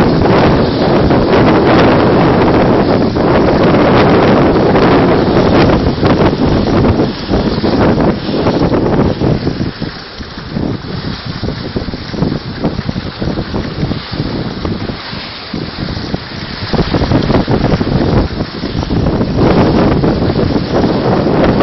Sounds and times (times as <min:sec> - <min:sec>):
Boat, Water vehicle: 0:00.0 - 0:21.6
Waves, surf: 0:00.0 - 0:21.6
Wind noise (microphone): 0:00.0 - 0:21.6.